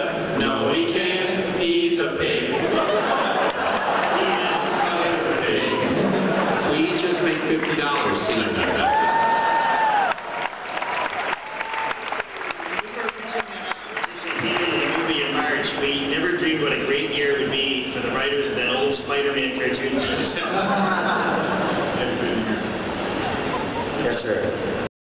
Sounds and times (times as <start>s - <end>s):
Speech: 0.0s - 2.6s, 4.2s - 6.1s, 6.7s - 8.8s, 12.8s - 21.0s, 24.0s - 24.6s.